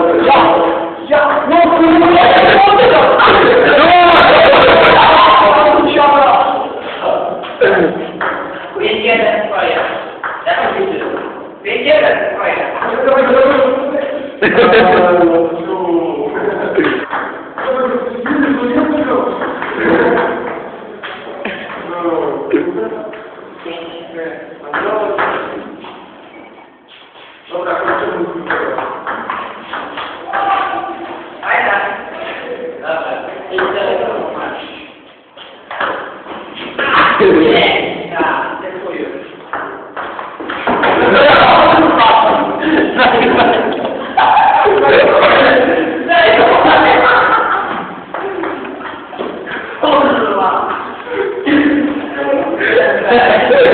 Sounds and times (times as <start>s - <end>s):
Speech: 0.0s - 8.0s, 8.7s - 17.0s, 17.6s - 25.6s, 27.5s - 28.8s, 30.2s - 35.0s, 36.8s - 39.4s, 41.0s - 47.6s, 49.8s - 53.7s.